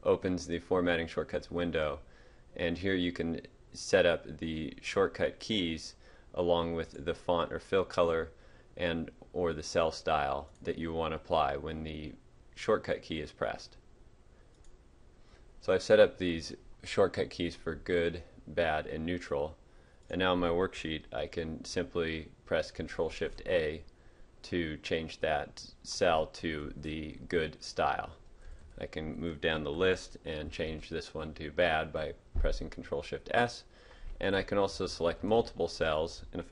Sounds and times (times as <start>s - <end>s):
Speech: 0.0s - 13.8s, 15.6s - 28.2s, 28.8s - 36.5s.